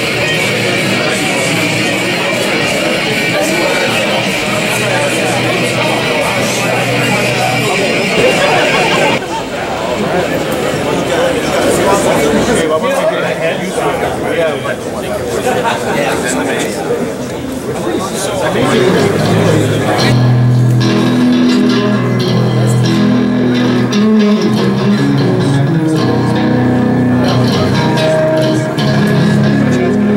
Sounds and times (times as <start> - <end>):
Music: 0.0 - 9.2, 18.7 - 30.1
Speech: 0.0 - 23.3, 23.9 - 30.1
Hubbub, speech noise, speech babble: 0.0 - 30.1.